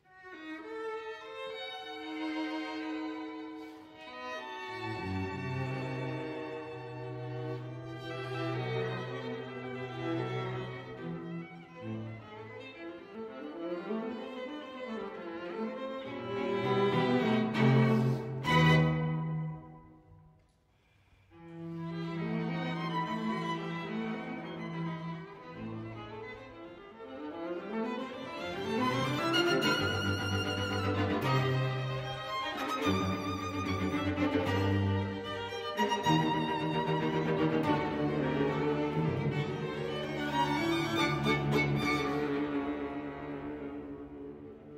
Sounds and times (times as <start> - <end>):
Violin, fiddle: 0.0 - 20.0, 21.3 - 44.7.